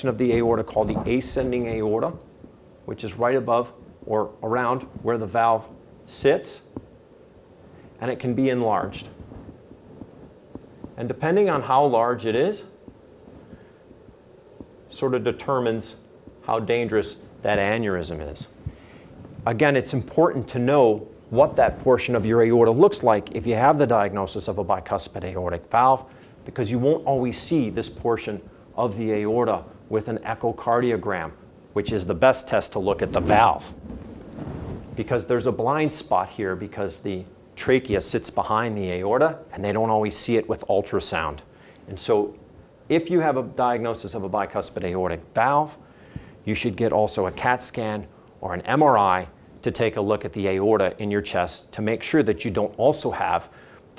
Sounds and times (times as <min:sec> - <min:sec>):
Speech: 0:00.0 - 0:02.3, 0:02.9 - 0:06.8, 0:08.0 - 0:09.2, 0:11.0 - 0:12.8, 0:14.9 - 0:18.6, 0:19.4 - 0:33.8, 0:35.0 - 0:45.8, 0:46.4 - 0:53.9
Inside, small room: 0:00.0 - 0:53.9.